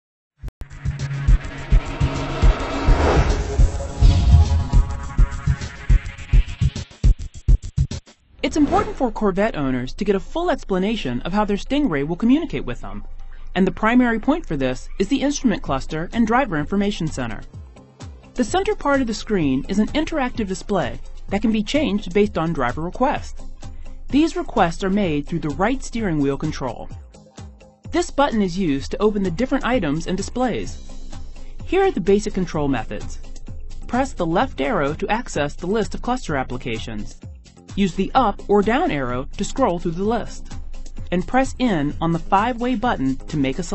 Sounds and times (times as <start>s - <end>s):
Music: 0.6s - 43.7s
Speech: 8.4s - 13.0s, 13.6s - 17.5s, 18.4s - 23.3s, 24.1s - 27.0s, 27.9s - 30.8s, 31.7s - 33.2s, 33.9s - 37.2s, 37.8s - 40.4s, 41.1s - 43.7s.